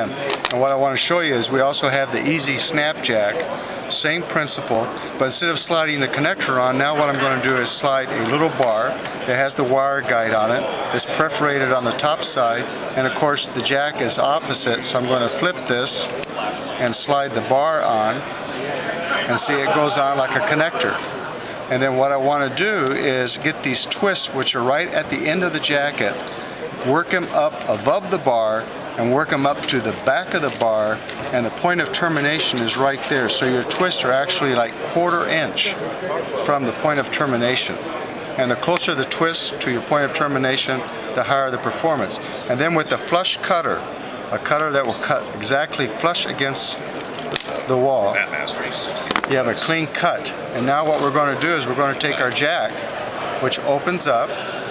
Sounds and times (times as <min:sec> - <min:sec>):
Speech: 0:00.0 - 0:46.8, 0:47.4 - 0:54.4.